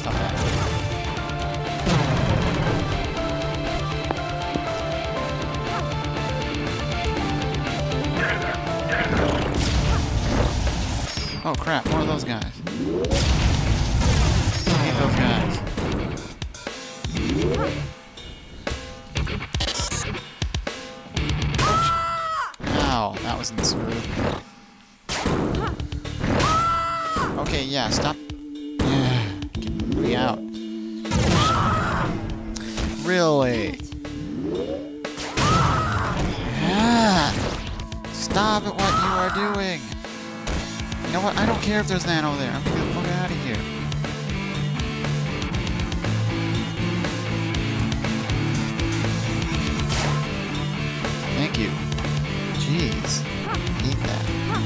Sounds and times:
Music: 0.0 - 54.6.

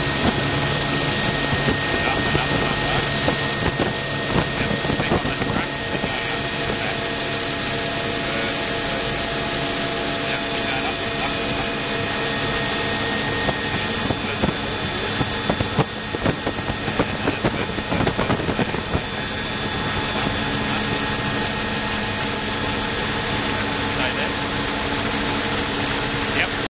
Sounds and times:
Helicopter: 0.0 - 26.7
Speech: 1.6 - 7.2, 8.1 - 9.3, 10.1 - 12.2, 13.5 - 15.8, 16.8 - 19.2, 20.0 - 21.3, 24.0 - 24.4, 26.3 - 26.7.

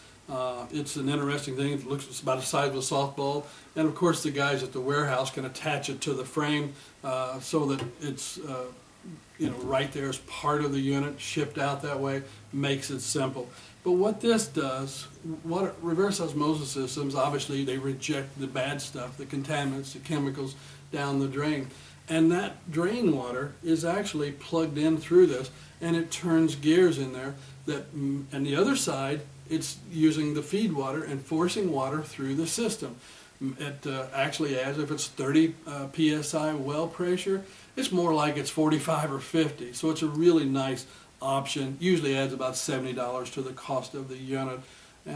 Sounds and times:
Speech: 0.3 - 45.1.

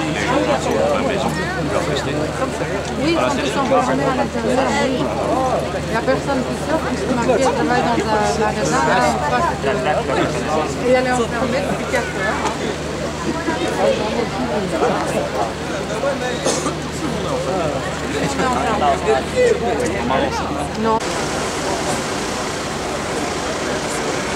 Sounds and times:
Speech: 0.0 - 22.2, 22.8 - 24.3.

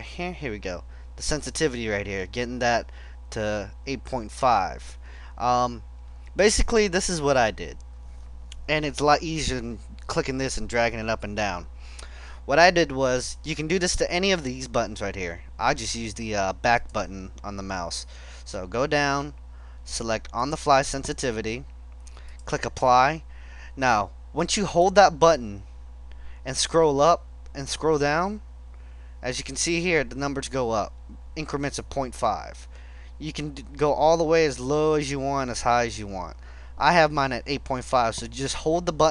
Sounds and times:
Speech: 0.0 - 5.8, 6.4 - 7.8, 8.7 - 11.7, 12.5 - 21.7, 22.5 - 23.2, 23.8 - 25.7, 26.4 - 28.5, 29.2 - 39.1.

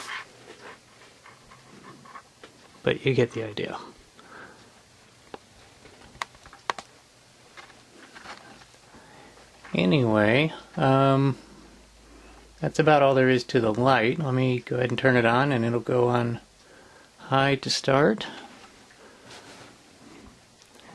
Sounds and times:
Inside, small room: 0.0 - 20.9
Speech: 2.8 - 4.0, 9.7 - 11.4, 12.6 - 16.5, 17.2 - 18.5.

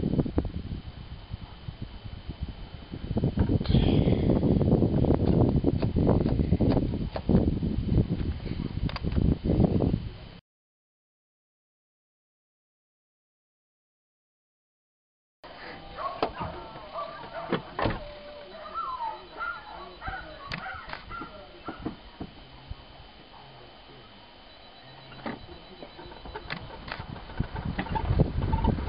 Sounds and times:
Animal: 15.9 - 24.2.

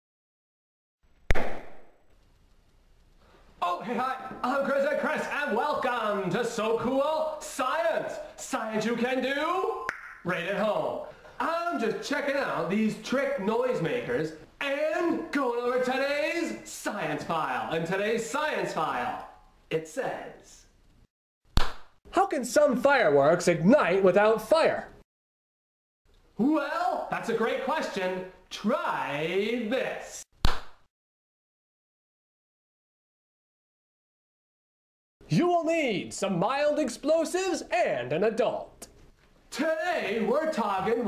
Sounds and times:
Inside, small room: 1.0 - 25.0, 26.1 - 30.9, 35.2 - 41.0
Speech: 3.6 - 20.7, 22.1 - 25.0, 26.4 - 30.3, 35.3 - 38.9, 39.5 - 41.0.

